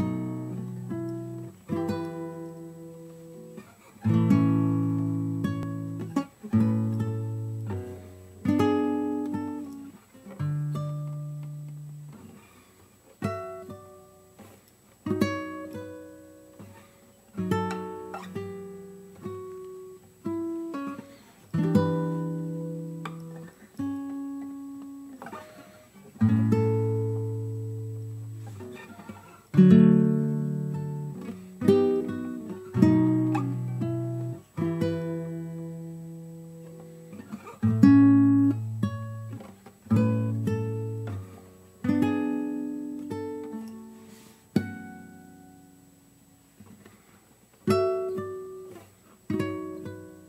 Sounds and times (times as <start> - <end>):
Acoustic guitar: 0.0 - 50.2.